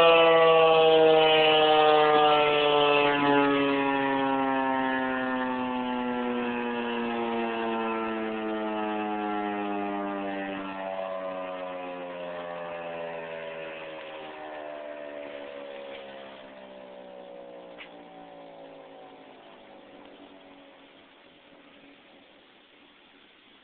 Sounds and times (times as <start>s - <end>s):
Siren: 0.0s - 22.9s.